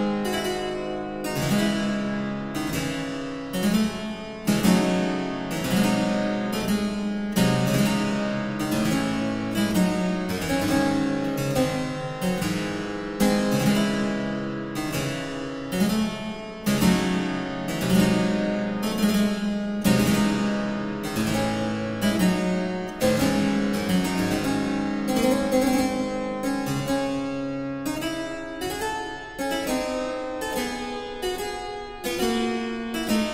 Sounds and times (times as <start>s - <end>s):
Piano: 0.0s - 33.3s.